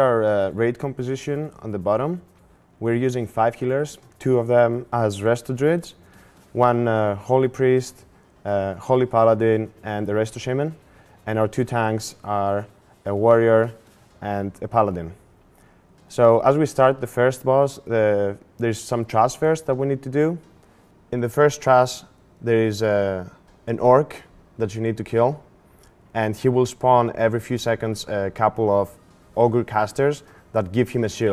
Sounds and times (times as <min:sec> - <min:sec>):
Speech: 0:00.0 - 0:06.0, 0:06.6 - 0:15.2, 0:16.1 - 0:20.5, 0:21.1 - 0:25.5, 0:26.1 - 0:31.3.